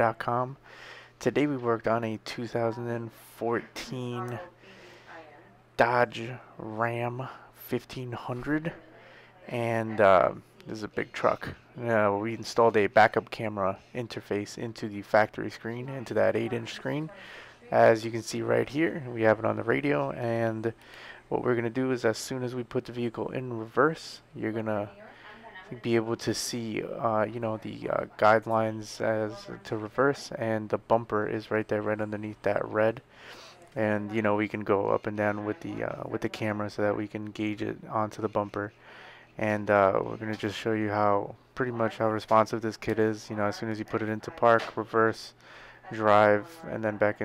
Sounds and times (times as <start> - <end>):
Speech: 0.0 - 0.6, 1.2 - 33.0, 33.6 - 38.8, 39.4 - 47.2.